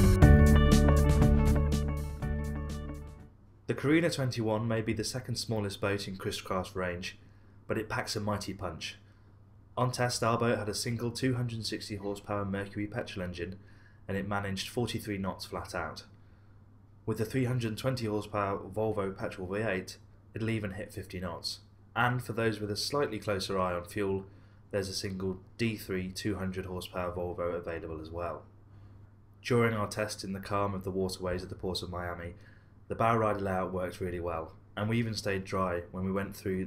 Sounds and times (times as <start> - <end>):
Speech: 3.7 - 9.0, 9.8 - 16.1, 17.1 - 28.5, 29.4 - 36.6.